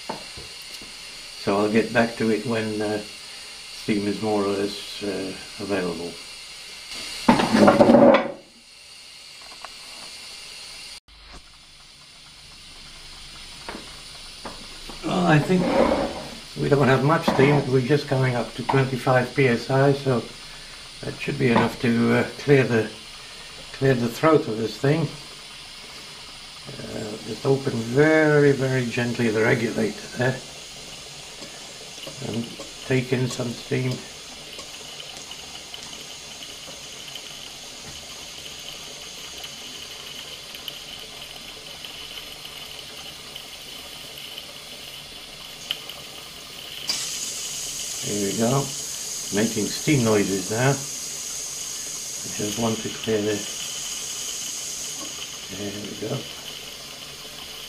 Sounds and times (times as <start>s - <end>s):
Steam: 0.0s - 57.6s
Speech: 1.4s - 3.1s, 3.8s - 6.2s, 15.0s - 15.9s, 16.6s - 20.3s, 21.0s - 23.0s, 23.8s - 25.2s, 26.7s - 30.4s, 32.2s - 34.1s, 48.0s - 50.9s, 52.3s - 53.5s, 55.5s - 56.3s
Engine: 45.0s - 49.4s.